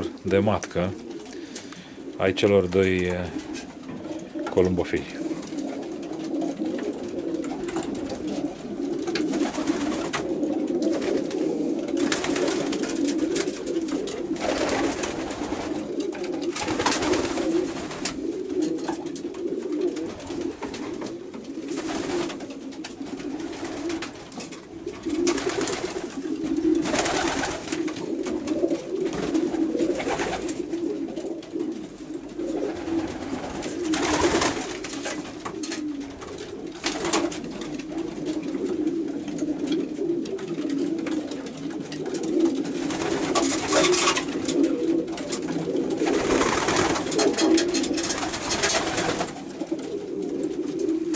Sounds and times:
Pigeon, dove: 3.3s - 51.1s.

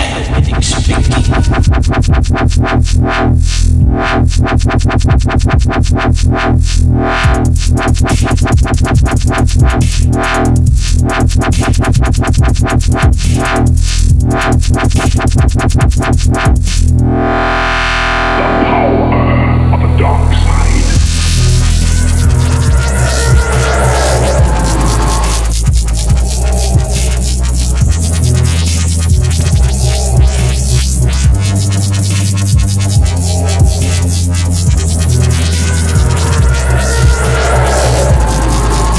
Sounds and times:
Dubstep: 0.0s - 38.9s.

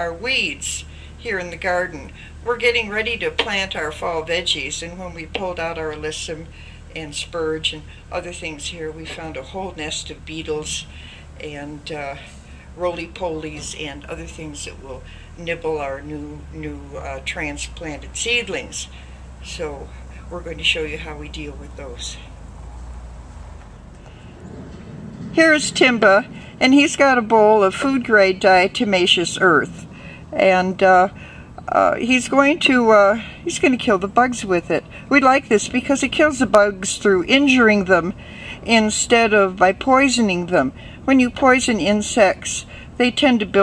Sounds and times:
Speech: 0.0s - 22.3s, 25.4s - 43.6s.

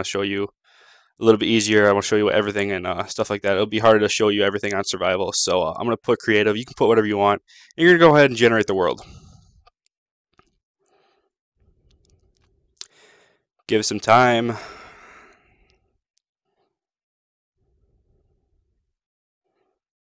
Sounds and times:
Speech: 0.0s - 0.5s, 1.2s - 9.2s, 13.7s - 14.7s
Inside, small room: 0.0s - 17.0s, 17.6s - 19.9s.

